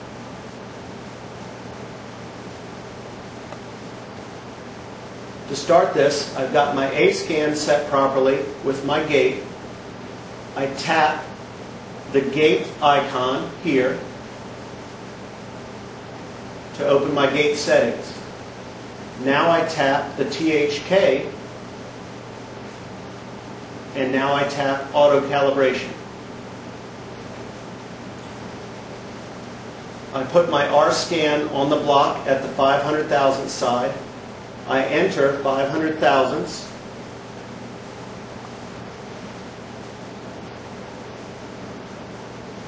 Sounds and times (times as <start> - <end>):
Speech: 5.5 - 9.5, 10.6 - 11.3, 12.1 - 14.1, 16.8 - 18.3, 19.2 - 21.4, 24.0 - 26.0, 30.2 - 34.1, 34.7 - 36.8.